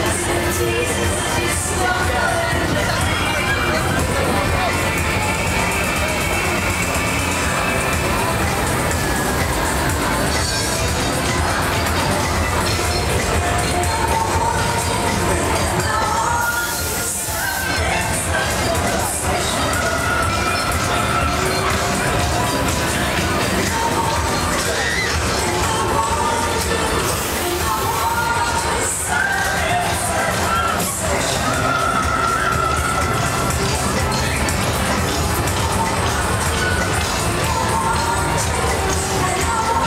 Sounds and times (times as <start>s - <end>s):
Music: 0.0s - 39.8s
Speech: 0.0s - 39.8s.